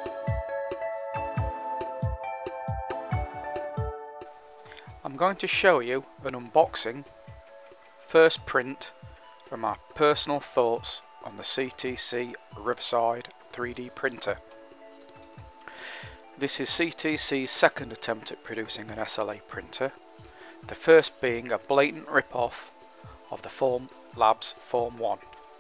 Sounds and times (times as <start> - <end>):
Music: 0.0 - 25.6
Speech: 5.0 - 7.1, 8.1 - 14.4, 16.4 - 20.0, 20.7 - 22.7, 23.3 - 25.2.